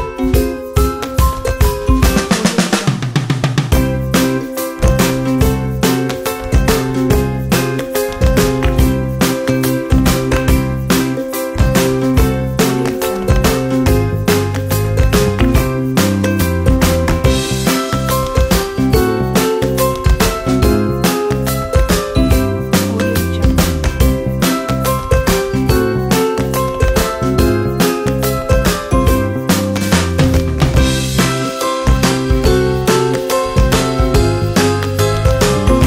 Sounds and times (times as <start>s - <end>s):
Funny music: 0.0s - 35.8s.